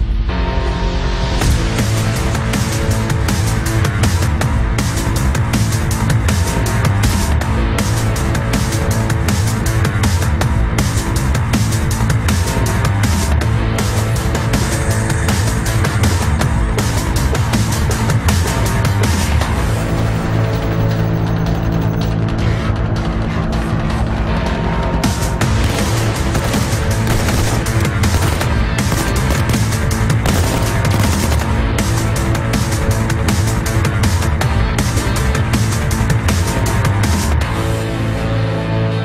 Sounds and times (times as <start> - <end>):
Music: 0.0 - 39.0.